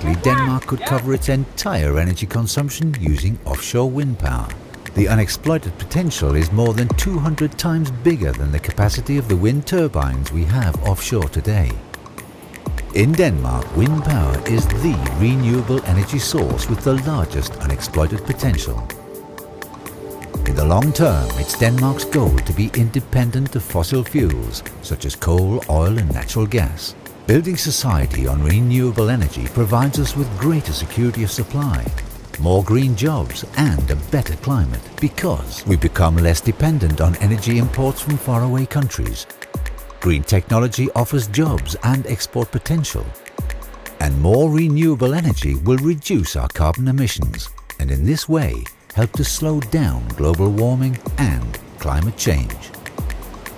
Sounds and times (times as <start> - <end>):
Speech: 0.0 - 11.8, 12.9 - 18.9, 20.5 - 39.3, 40.0 - 43.2, 44.0 - 52.8
Music: 0.0 - 53.5.